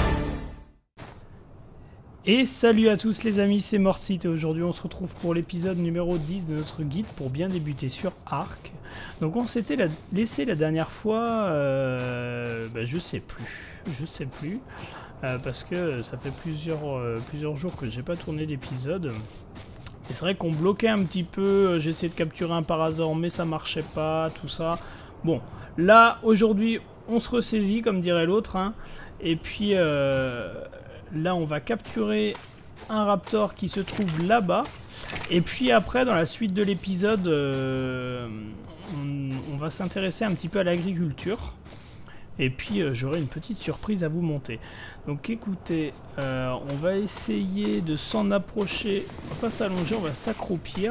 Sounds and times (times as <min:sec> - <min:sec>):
Speech: 0:02.2 - 0:41.6, 0:42.4 - 0:50.9.